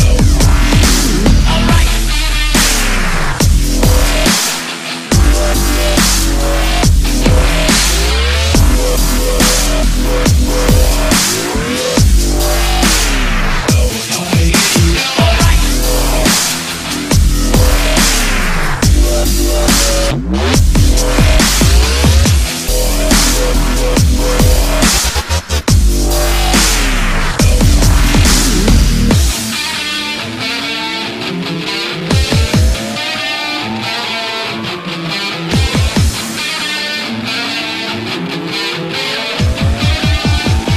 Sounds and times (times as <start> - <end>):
Dubstep: 0.0 - 31.2, 31.9 - 40.7.